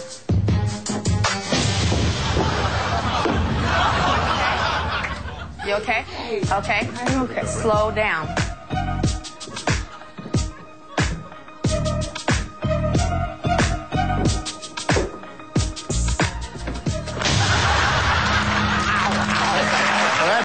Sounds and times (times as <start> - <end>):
Music: 0.0 - 20.4.